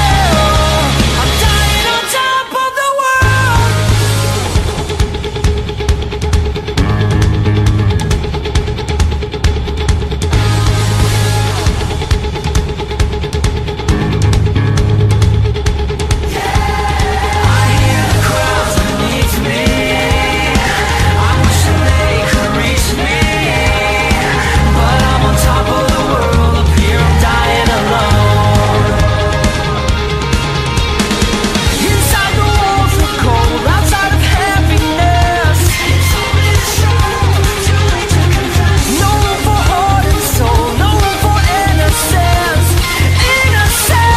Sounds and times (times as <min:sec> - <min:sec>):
Music: 0:00.0 - 0:44.1.